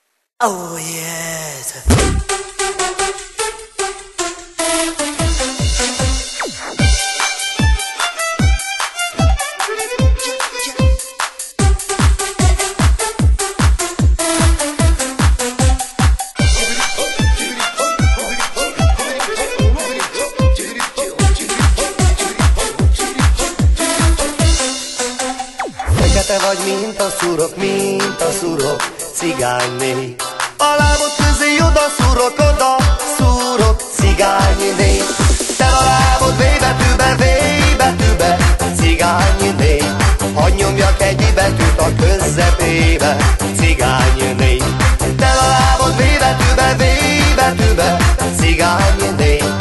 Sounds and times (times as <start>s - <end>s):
Techno: 11.6s - 49.6s.